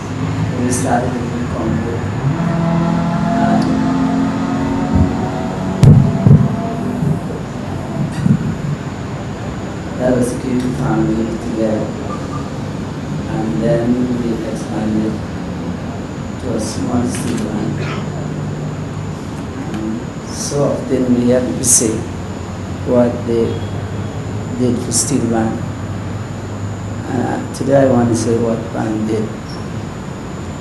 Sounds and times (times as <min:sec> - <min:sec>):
Male speech, man speaking: 0:00.0 - 0:02.1, 0:03.3 - 0:03.9, 0:10.0 - 0:12.0, 0:13.3 - 0:15.2, 0:16.4 - 0:18.2, 0:19.6 - 0:22.1, 0:22.9 - 0:23.6, 0:24.6 - 0:25.6, 0:27.0 - 0:29.4
Narration, monologue: 0:00.0 - 0:30.0.